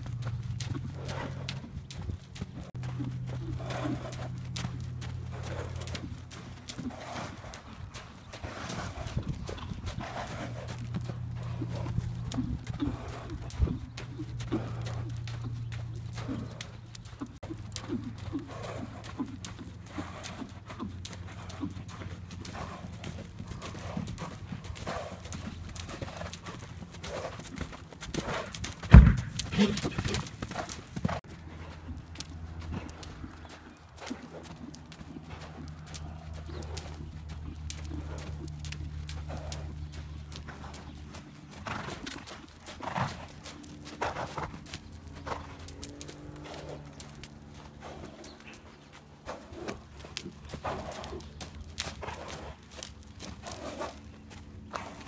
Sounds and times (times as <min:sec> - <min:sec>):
Clip-clop: 0:00.0 - 0:55.0.